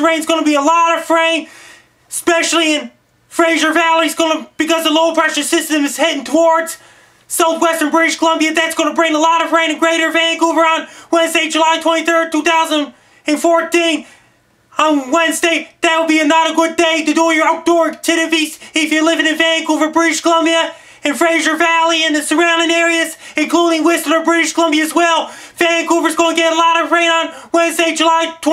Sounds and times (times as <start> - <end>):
Speech: 0.0 - 1.5, 2.1 - 14.1, 14.7 - 28.5.